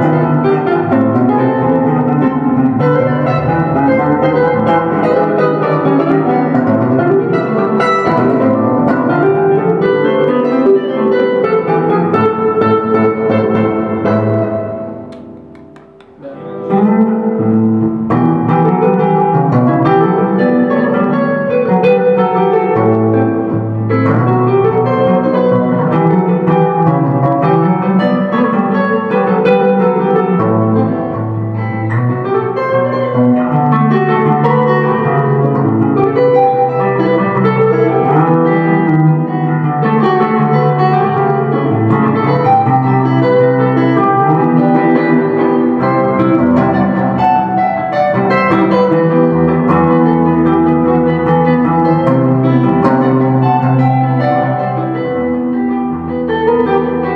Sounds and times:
Electric guitar: 0.0s - 57.1s
Strum: 0.0s - 57.1s.

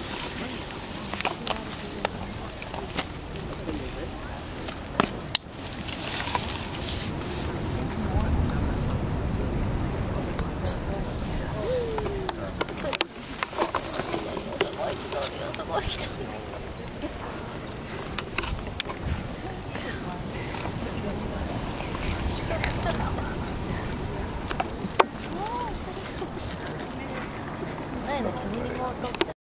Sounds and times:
Speech: 7.3s - 17.5s, 19.4s - 29.4s.

